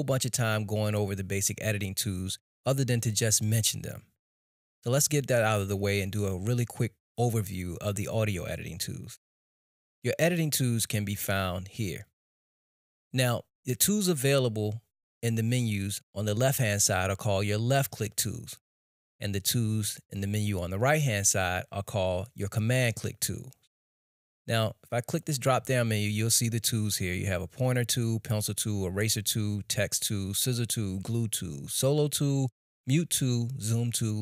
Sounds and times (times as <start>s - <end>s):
Speech: 0.0s - 4.1s, 4.8s - 9.2s, 10.1s - 12.1s, 13.2s - 18.6s, 19.2s - 23.6s, 24.5s - 34.2s.